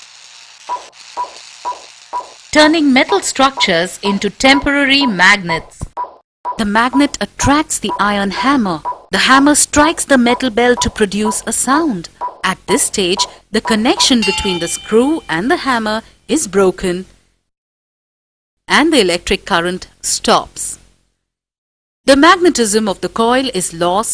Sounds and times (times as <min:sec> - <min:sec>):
Speech: 0:02.6 - 0:05.9, 0:06.6 - 0:17.1, 0:18.7 - 0:20.8, 0:22.1 - 0:24.1.